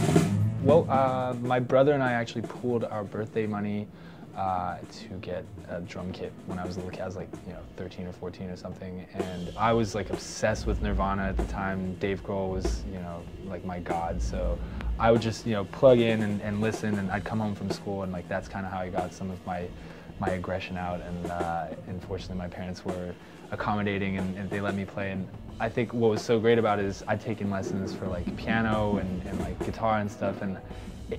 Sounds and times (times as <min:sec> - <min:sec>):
Music: 0:00.0 - 0:31.1
Speech: 0:00.6 - 0:31.1.